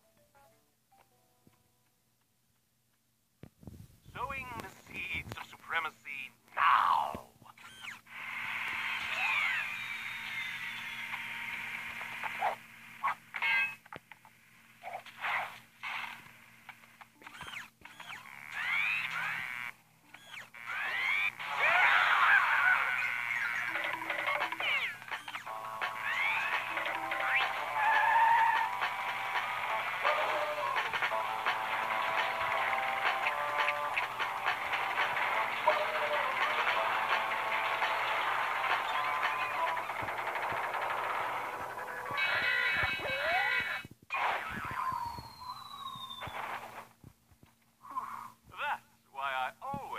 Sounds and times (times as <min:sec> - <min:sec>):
Sound effect: 0:07.6 - 0:13.8, 0:17.2 - 0:46.9.